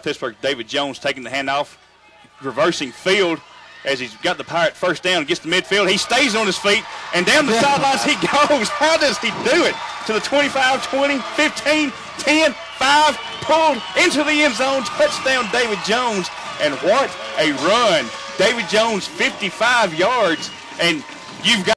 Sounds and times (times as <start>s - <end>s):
Speech: 0.0s - 21.7s.